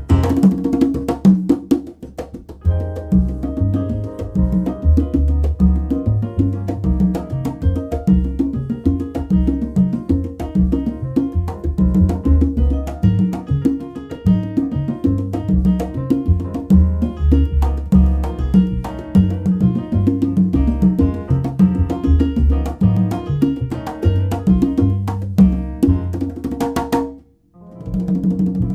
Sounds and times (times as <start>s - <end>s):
Drum: 0.0s - 28.7s
Salsa music: 0.0s - 28.7s.